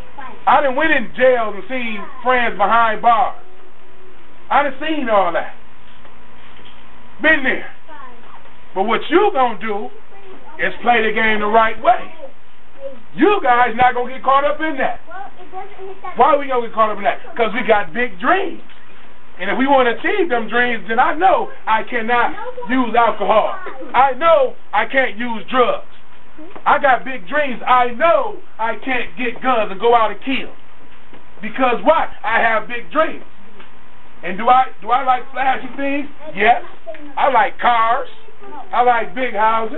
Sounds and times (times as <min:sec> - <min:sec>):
Female speech, woman speaking: 0:00.0 - 0:00.5, 0:07.8 - 0:08.5, 0:09.9 - 0:10.8, 0:11.9 - 0:13.0, 0:15.1 - 0:16.2, 0:22.3 - 0:24.0, 0:36.2 - 0:37.2, 0:38.2 - 0:38.8
Narration, monologue: 0:00.0 - 0:39.7
Male speech, man speaking: 0:00.5 - 0:03.4, 0:04.5 - 0:05.6, 0:07.2 - 0:07.8, 0:08.8 - 0:09.9, 0:10.6 - 0:12.1, 0:13.2 - 0:15.0, 0:16.2 - 0:18.6, 0:19.4 - 0:25.9, 0:26.7 - 0:30.6, 0:31.4 - 0:33.2, 0:34.2 - 0:39.7.